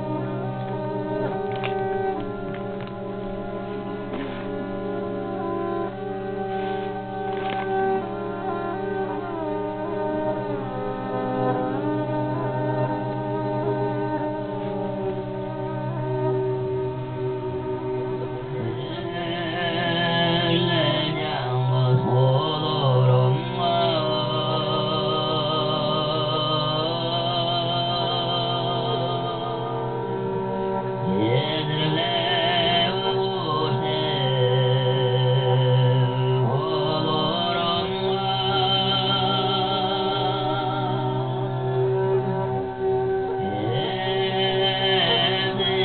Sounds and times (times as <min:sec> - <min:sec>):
Music: 0:00.0 - 0:45.8
Male singing: 0:18.6 - 0:30.2, 0:31.0 - 0:41.6, 0:43.4 - 0:45.8.